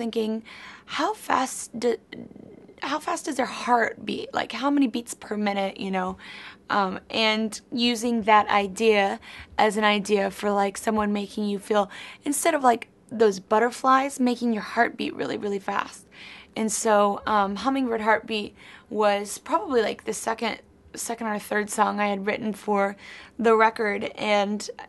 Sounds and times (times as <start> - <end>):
Speech: 0.0 - 24.8.